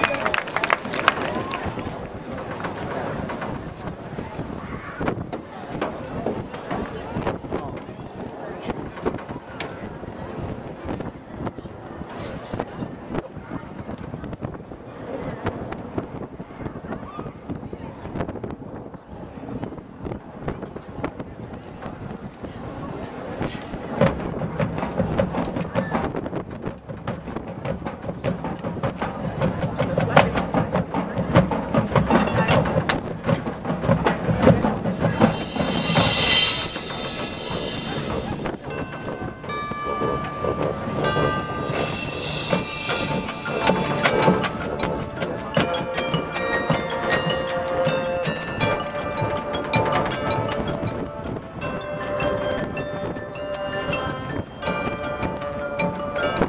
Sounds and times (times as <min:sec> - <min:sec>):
Speech: 0:00.0 - 0:26.2, 0:28.9 - 0:33.6.